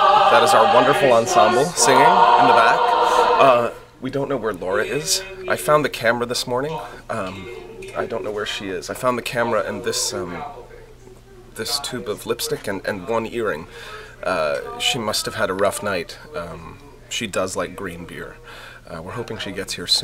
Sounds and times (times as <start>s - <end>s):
Speech: 0.3s - 2.8s, 3.4s - 20.0s.